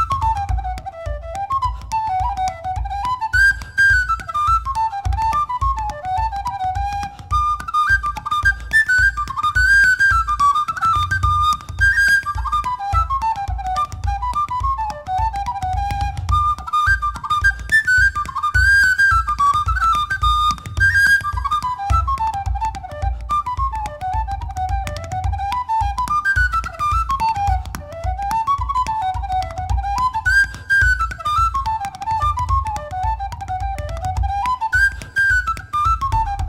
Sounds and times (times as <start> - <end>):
Music: 0.0 - 36.4.